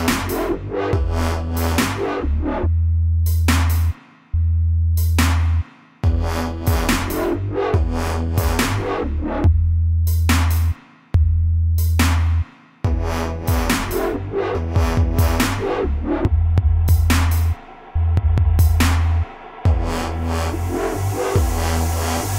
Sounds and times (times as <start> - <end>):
Drum machine: 0.0 - 2.0, 5.0 - 22.3
Dubstep: 0.0 - 2.7, 5.0 - 10.7, 12.9 - 22.3.